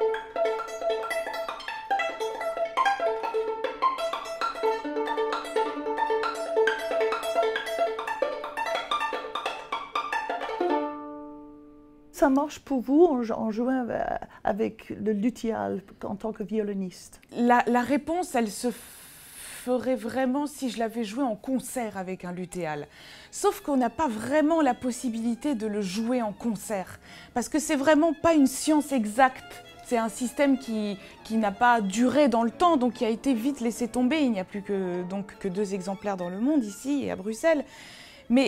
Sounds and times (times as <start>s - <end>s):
Musical instrument: 0.0s - 12.0s, 29.4s - 37.2s
Speech: 12.2s - 18.8s, 19.6s - 37.7s.